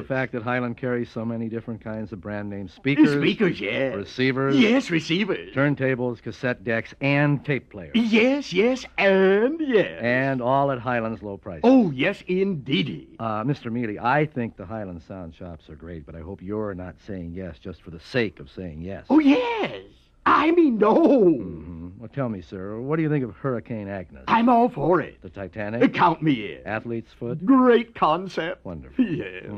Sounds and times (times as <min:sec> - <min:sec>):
Speech: 0:00.0 - 0:29.5.